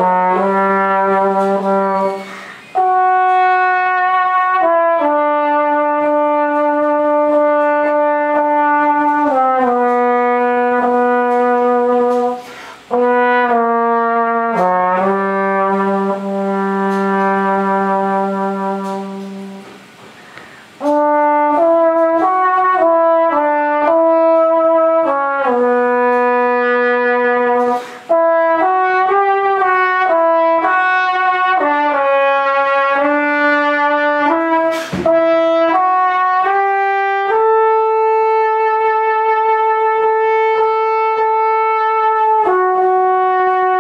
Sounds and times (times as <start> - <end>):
Trombone: 0.0 - 43.8.